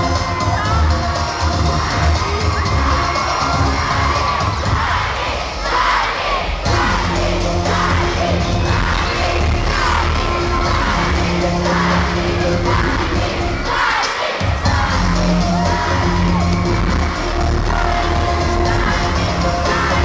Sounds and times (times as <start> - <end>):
Music: 0.0 - 20.0.